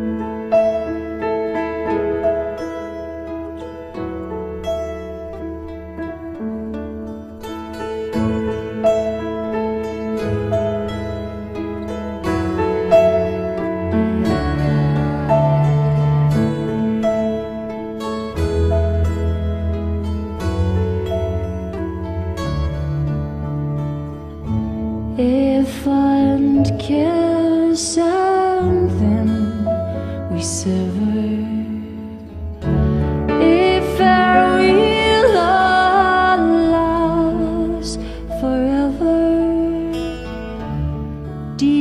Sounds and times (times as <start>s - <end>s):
New-age music: 0.0s - 41.8s.